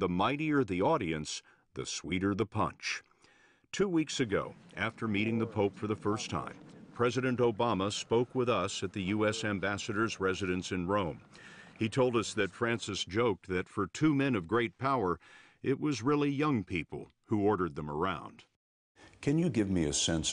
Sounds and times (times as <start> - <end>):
Speech: 0.0 - 3.1, 3.7 - 18.5, 19.2 - 20.3.